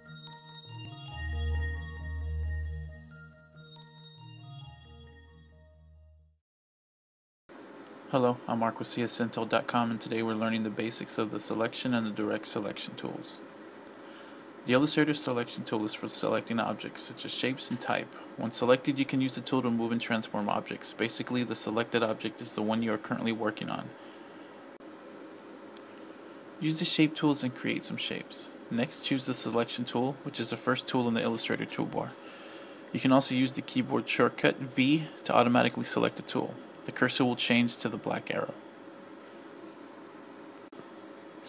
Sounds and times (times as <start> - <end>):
Speech: 8.1 - 13.4, 14.7 - 24.0, 26.6 - 32.2, 33.0 - 38.6.